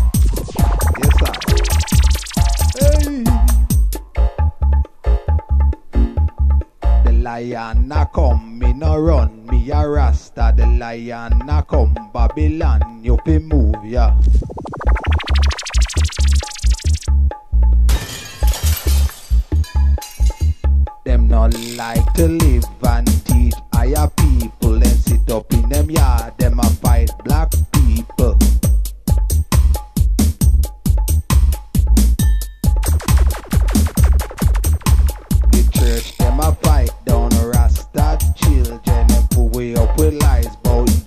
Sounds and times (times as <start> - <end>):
Music: 0.0 - 41.0.